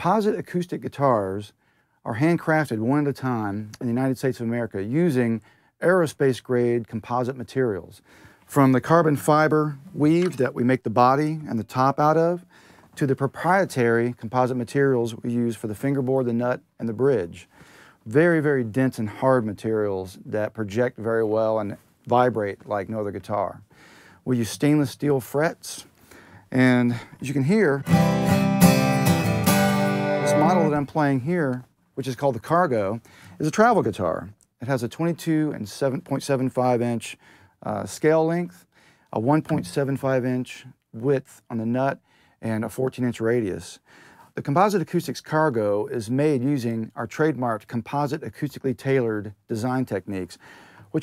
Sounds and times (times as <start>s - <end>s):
Speech: 0.0s - 25.9s, 26.5s - 27.9s, 30.2s - 51.0s.